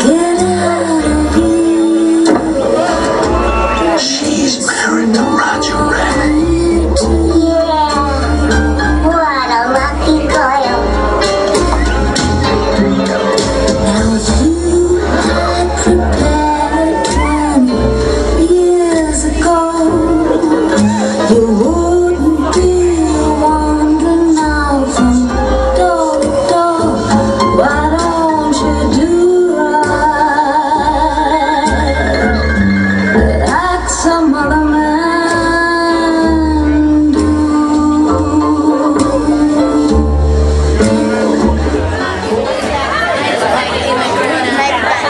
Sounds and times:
Music: 0.0 - 45.1.

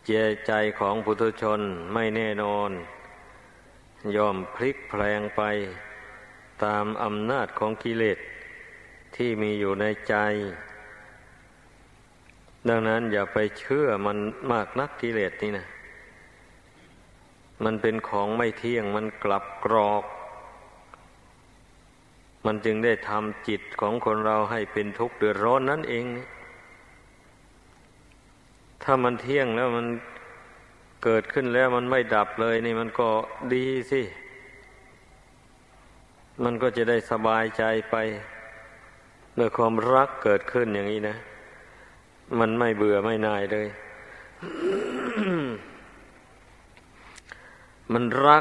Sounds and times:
Speech: 0.0 - 3.0, 4.0 - 6.0, 6.6 - 8.5, 9.1 - 11.0, 12.6 - 15.9, 17.6 - 20.6, 22.4 - 26.5, 28.8 - 30.4, 31.0 - 34.2, 36.4 - 38.7, 39.4 - 41.4, 42.3 - 45.7, 47.9 - 48.4.

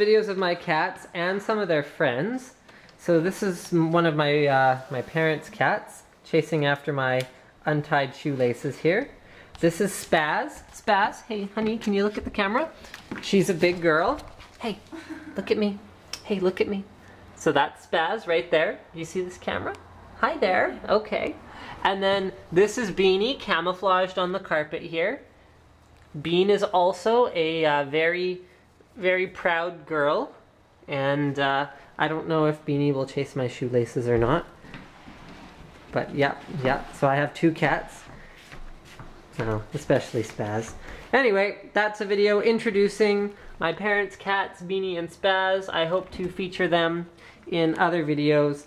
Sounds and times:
Speech: 0.0 - 25.3, 26.1 - 34.6, 35.9 - 38.1, 39.4 - 48.6.

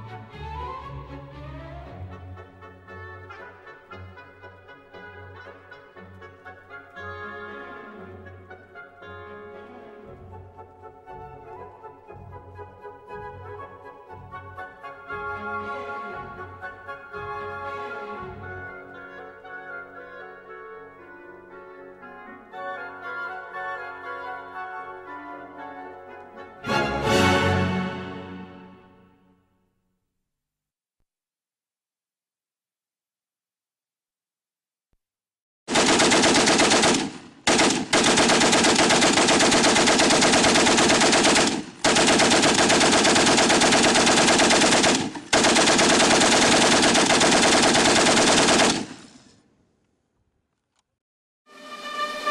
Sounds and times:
Machine gun: 35.7 - 49.4.

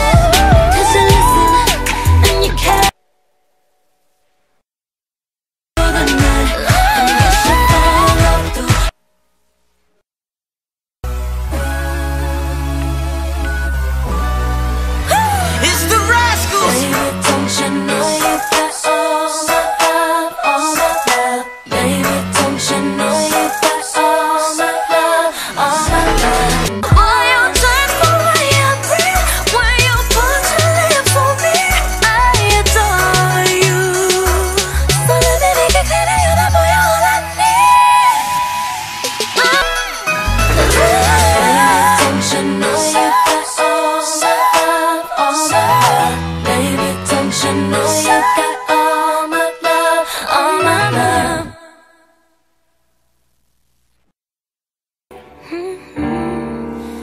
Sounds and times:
Pop music: 0.0 - 3.0, 5.8 - 9.0, 14.8 - 51.6
Singing: 0.0 - 3.0, 5.8 - 9.0, 15.1 - 52.2
Song: 39.4 - 42.8.

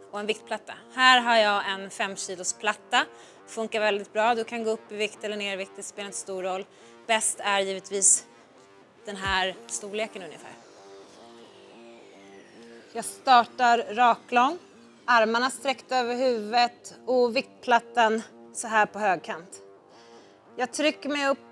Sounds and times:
Music: 0.0 - 21.5
Speech: 0.2 - 8.2, 9.1 - 10.6, 13.0 - 19.6, 20.6 - 21.4.

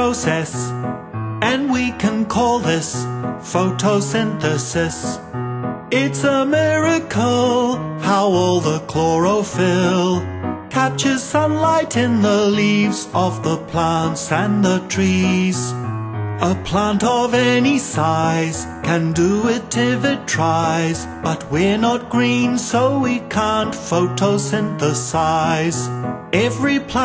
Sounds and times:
Music: 0.0 - 27.0.

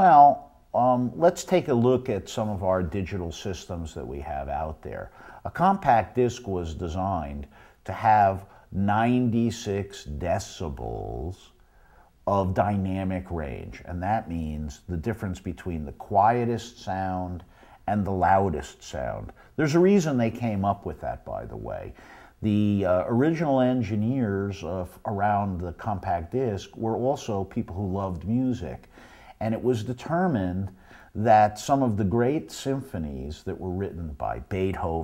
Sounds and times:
Speech: 0.0 - 11.6, 12.2 - 35.0.

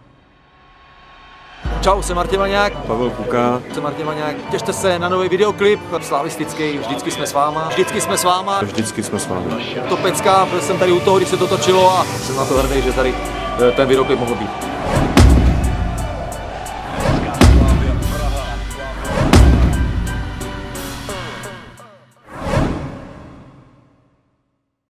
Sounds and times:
Music: 0.0 - 24.5.

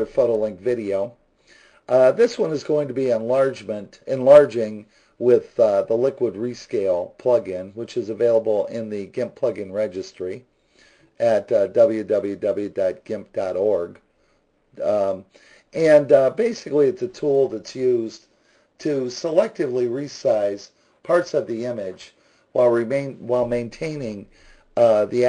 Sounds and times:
Speech: 0.0 - 1.2, 1.9 - 10.5, 11.2 - 14.1, 14.8 - 25.2.

